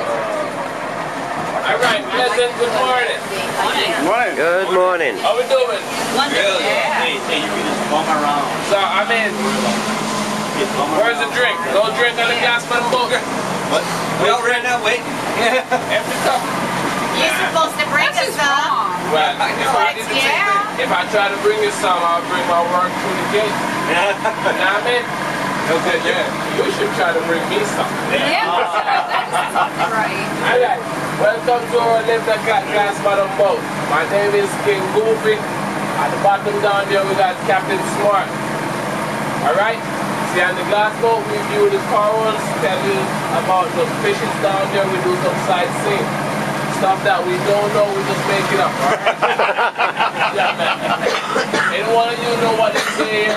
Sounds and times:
Motorboat, speedboat: 0.0s - 53.3s.

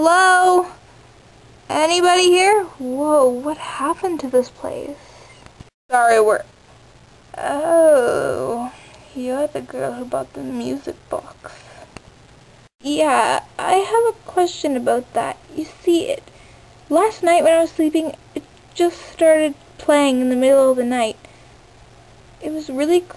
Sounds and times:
Speech: 0.0s - 0.8s, 1.7s - 5.1s, 5.9s - 6.5s, 7.4s - 11.8s, 12.8s - 16.2s, 16.9s - 21.2s, 22.4s - 23.1s.

